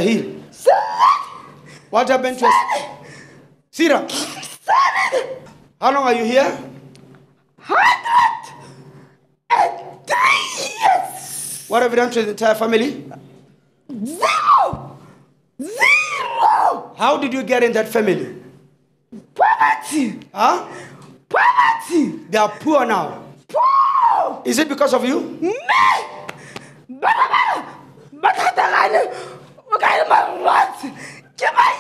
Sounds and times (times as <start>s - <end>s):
Screaming: 0.6s - 1.6s, 2.3s - 3.1s, 4.6s - 5.6s, 7.6s - 8.8s, 9.5s - 11.8s, 14.0s - 15.0s, 15.6s - 17.0s, 19.4s - 20.0s, 21.3s - 22.1s, 23.5s - 24.5s, 25.6s - 26.3s, 26.9s - 31.8s
Speech: 5.8s - 6.8s, 10.6s - 13.2s, 17.0s - 18.4s, 19.2s - 20.7s, 21.7s - 23.2s, 24.4s - 25.7s, 28.1s - 31.8s.